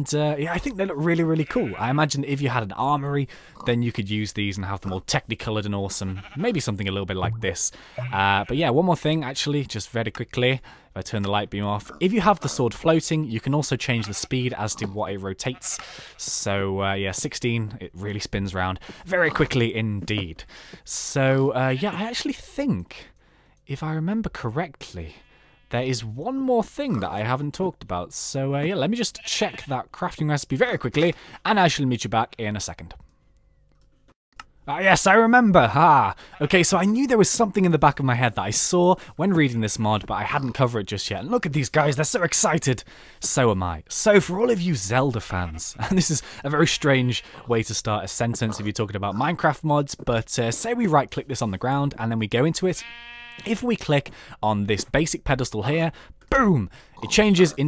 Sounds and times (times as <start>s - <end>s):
Speech: 0.0s - 33.0s, 34.7s - 52.8s, 53.4s - 57.6s.